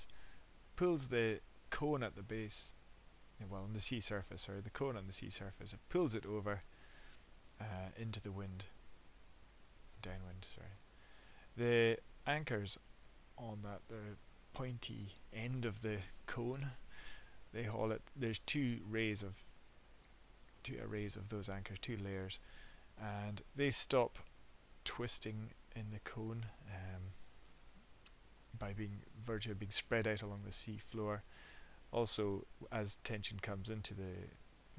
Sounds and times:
Speech: 0:00.8 - 0:02.8, 0:03.4 - 0:06.6, 0:07.6 - 0:08.8, 0:10.0 - 0:10.8, 0:11.6 - 0:12.8, 0:13.4 - 0:16.8, 0:17.5 - 0:19.5, 0:20.6 - 0:22.4, 0:23.0 - 0:24.2, 0:24.8 - 0:27.2, 0:28.6 - 0:31.2, 0:31.9 - 0:34.4.

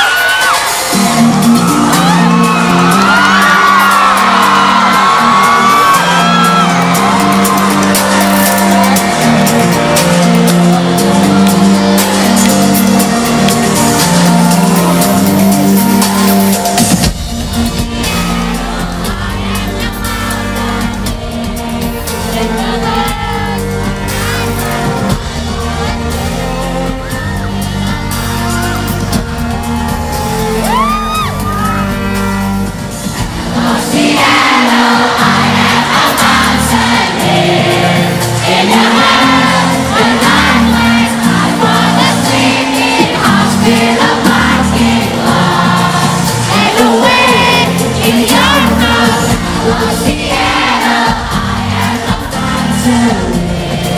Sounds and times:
Music: 0:00.0 - 0:53.9.

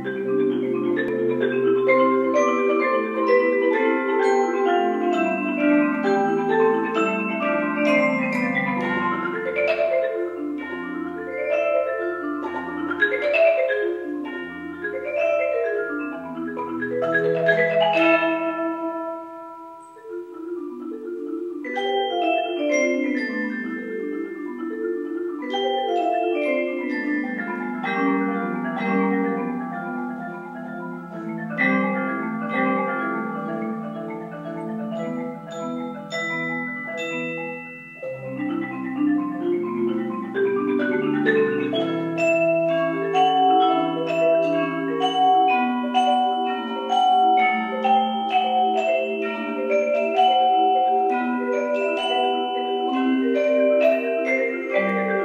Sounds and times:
Marimba, xylophone: 0:00.0 - 0:55.2
Vibraphone: 0:00.0 - 0:55.2.

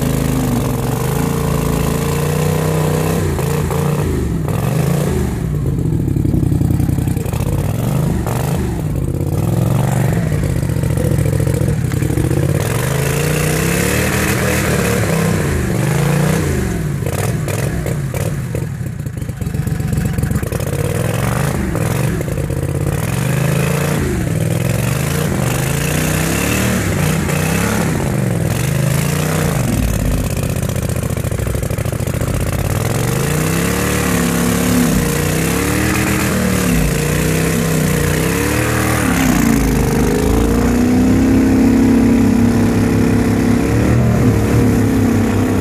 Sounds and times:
Outside, rural or natural: 0:00.0 - 0:45.6
Vehicle: 0:00.0 - 0:45.6.

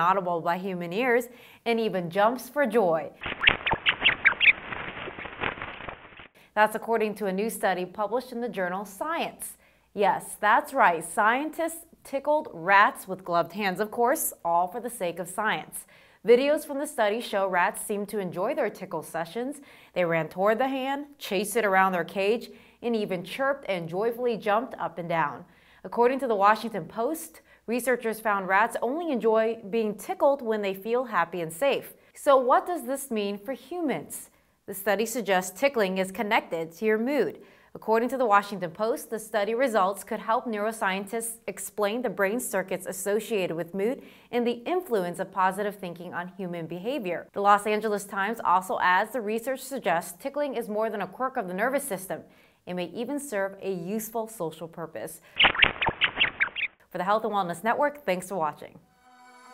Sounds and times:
Speech: 0:00.0 - 0:03.2, 0:06.6 - 0:55.2, 0:56.9 - 0:58.8.

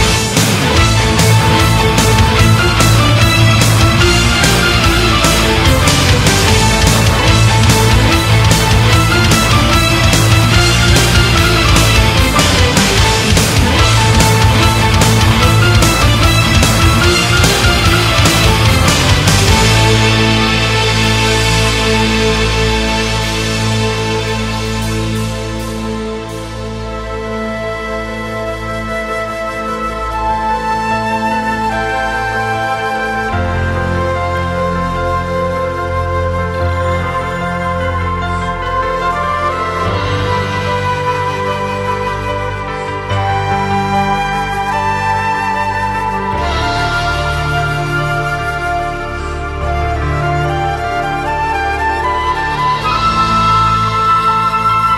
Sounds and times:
Music: 0:00.0 - 0:54.9.

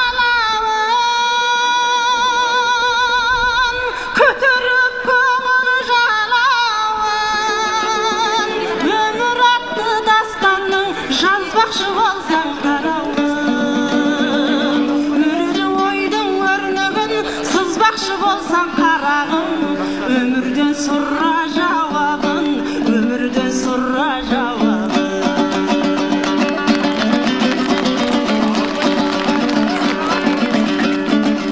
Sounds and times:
Singing: 0:00.0 - 0:26.2.

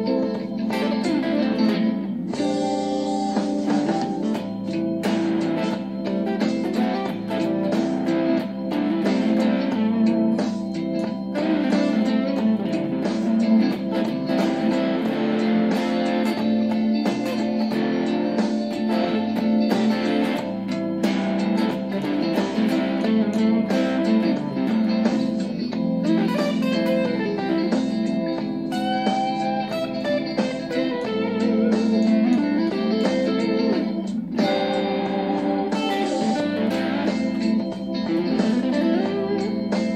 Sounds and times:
Blues: 0:00.0 - 0:39.9
Electric guitar: 0:00.0 - 0:39.9.

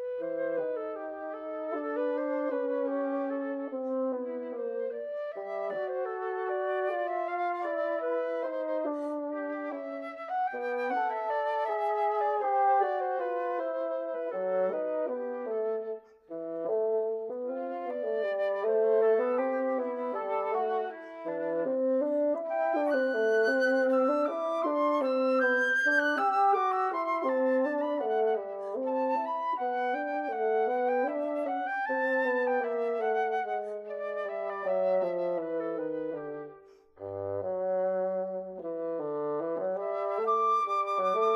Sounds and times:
Music: 0:00.0 - 0:41.3.

